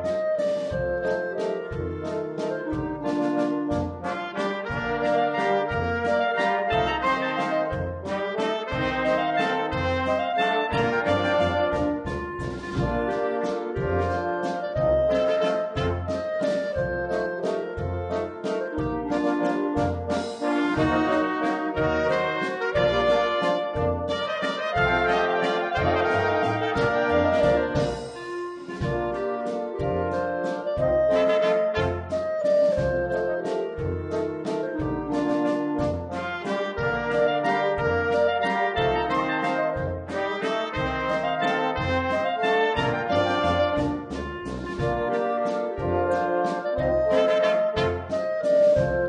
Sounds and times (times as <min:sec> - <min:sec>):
Jazz: 0:00.0 - 0:49.0.